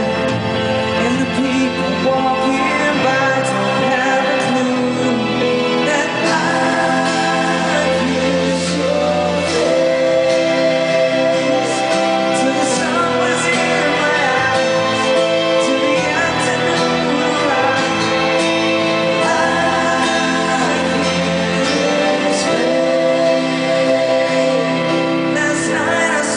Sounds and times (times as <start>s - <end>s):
Inside, large room or hall: 0.0s - 26.3s
Music: 0.0s - 26.3s.